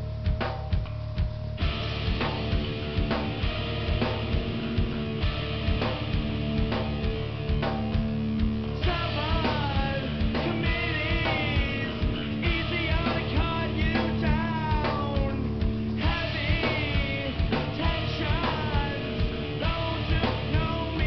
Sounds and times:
Music: 0:00.0 - 0:21.0.

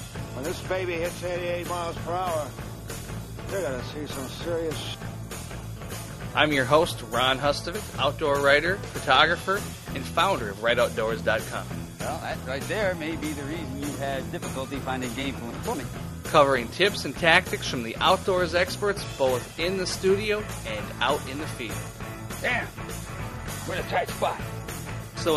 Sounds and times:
Music: 0:00.0 - 0:25.3
Speech: 0:00.4 - 0:02.5, 0:03.5 - 0:05.0, 0:06.4 - 0:21.8, 0:23.6 - 0:24.4.

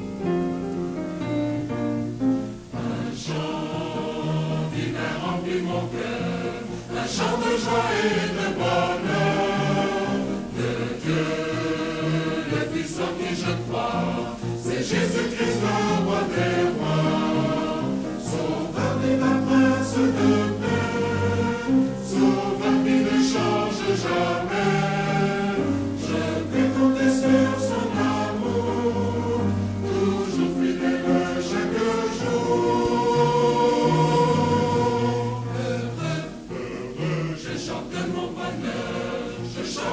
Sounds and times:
Mantra: 0:02.7 - 0:39.9.

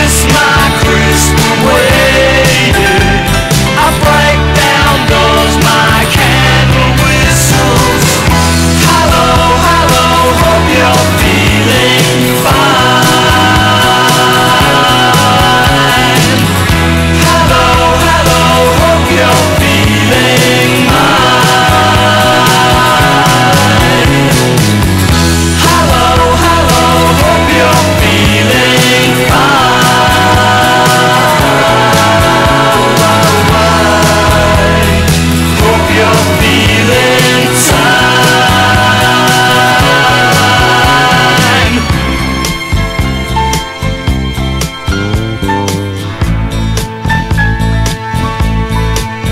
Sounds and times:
Singing: 0:00.0 - 0:42.2.

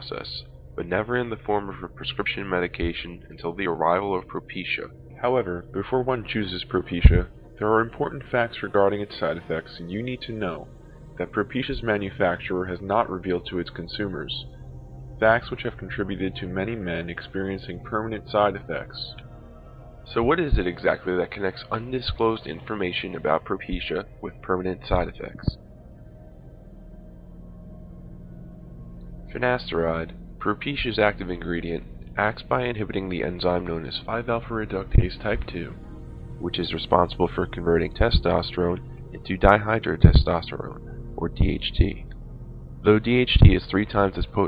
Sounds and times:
Speech: 0:00.0 - 0:14.4, 0:15.2 - 0:19.2, 0:20.1 - 0:25.6, 0:29.3 - 0:35.8, 0:36.4 - 0:42.1, 0:42.9 - 0:44.4
Music: 0:00.0 - 0:44.4.

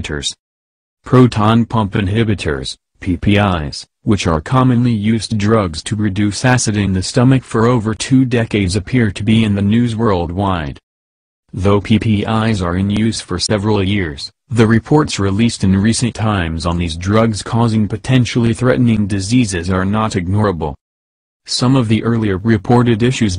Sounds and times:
Speech: 0:00.0 - 0:00.4, 0:01.0 - 0:10.8, 0:11.5 - 0:20.8, 0:21.5 - 0:23.3.

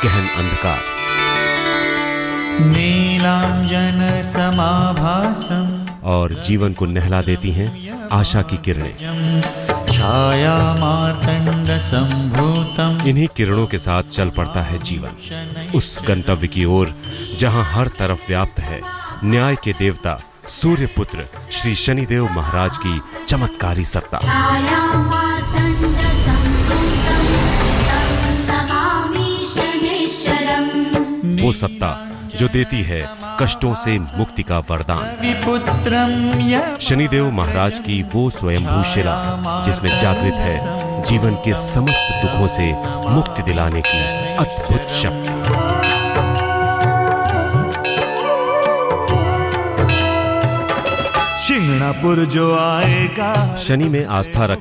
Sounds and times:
Sitar: 0:00.0 - 0:54.6.

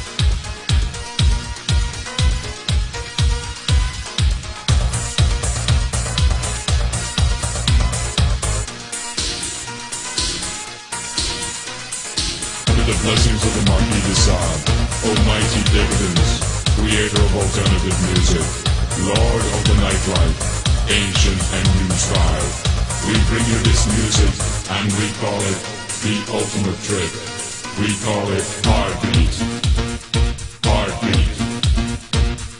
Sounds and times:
Music: 0:00.0 - 0:32.5.

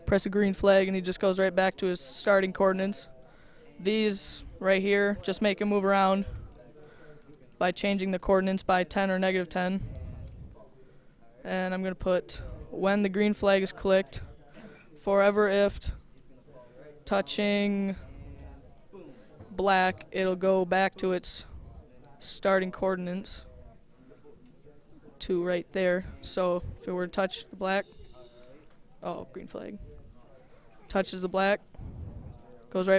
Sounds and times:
Speech: 0:00.0 - 0:32.9.

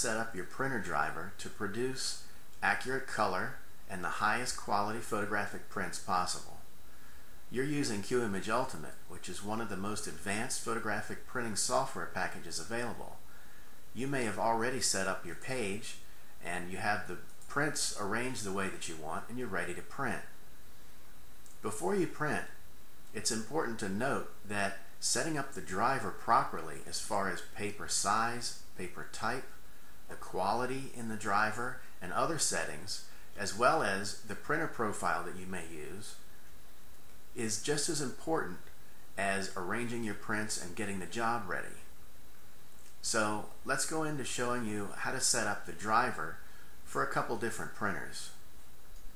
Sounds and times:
Speech: 0:00.0 - 0:06.6, 0:07.5 - 0:13.2, 0:14.0 - 0:20.4, 0:21.6 - 0:36.2, 0:37.4 - 0:41.9, 0:43.0 - 0:48.4.

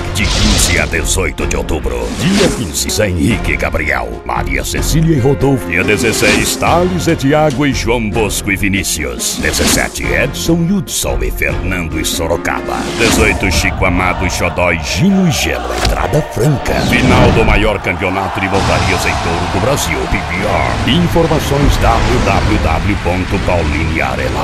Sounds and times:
Background music: 0:00.0 - 0:24.4
Speech: 0:00.0 - 0:24.4.

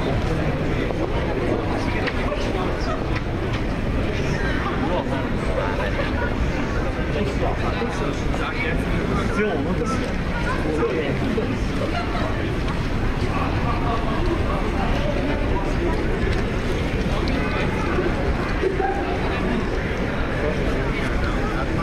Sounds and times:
Crowd: 0:00.0 - 0:21.8
Hubbub, speech noise, speech babble: 0:00.0 - 0:21.8
Speech: 0:00.0 - 0:21.8.

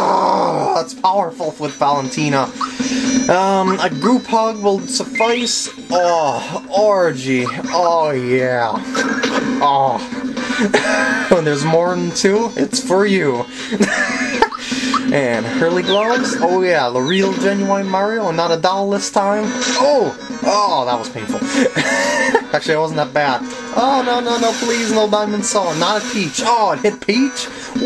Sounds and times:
Music: 0:00.0 - 0:27.8
Speech: 0:00.6 - 0:02.5, 0:03.3 - 0:08.8, 0:11.3 - 0:13.5, 0:15.1 - 0:21.5, 0:22.5 - 0:27.5.

